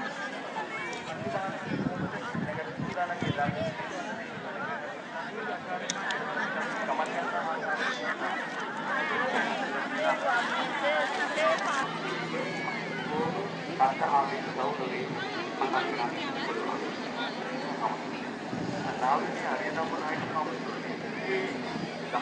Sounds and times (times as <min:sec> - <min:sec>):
Speech: 0:00.0 - 0:22.2.